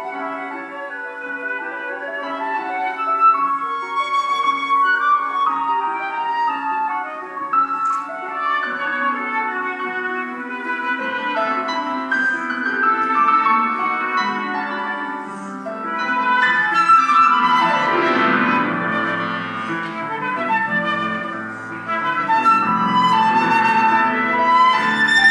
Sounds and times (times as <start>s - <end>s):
Flute: 0.0s - 25.3s.